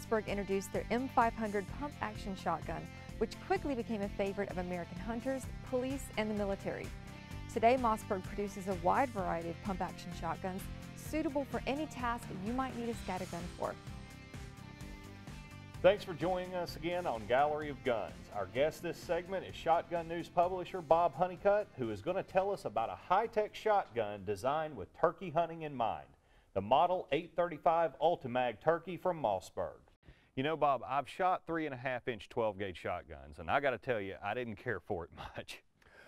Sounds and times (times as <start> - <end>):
Speech: 0.0 - 6.9, 7.6 - 13.8, 15.9 - 29.8, 30.4 - 35.6.